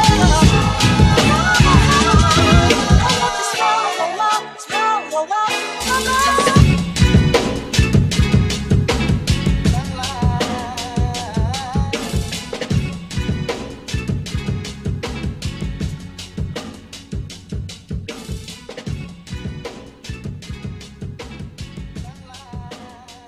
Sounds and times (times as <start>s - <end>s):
Hip hop music: 0.0s - 23.2s.